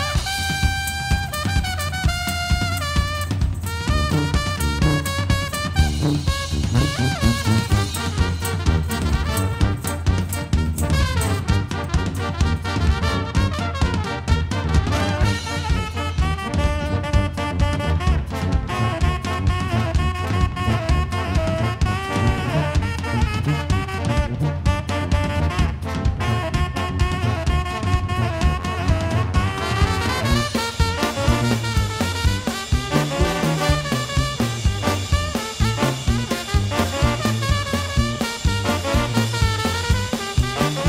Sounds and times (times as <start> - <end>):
Brass instrument: 0.0 - 40.8
Jazz: 0.0 - 40.8.